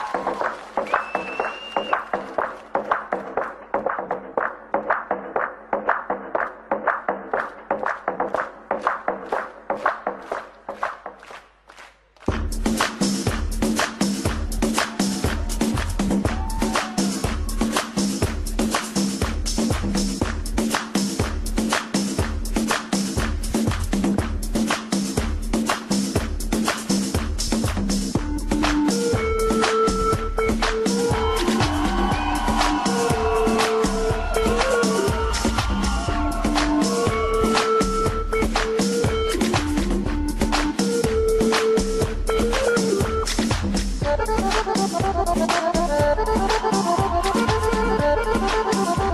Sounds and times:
Electronic dance music: 12.3s - 49.1s
House music: 12.3s - 49.1s
Musical instrument: 28.4s - 49.1s.

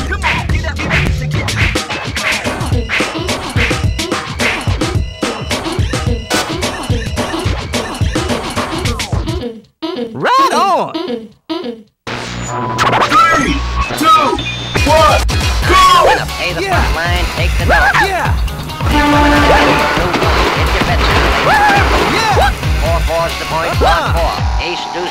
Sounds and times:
Music: 0.0s - 9.5s, 12.1s - 25.1s
Speech: 10.2s - 11.0s, 13.1s - 18.4s, 19.5s - 21.2s, 22.2s - 25.1s.

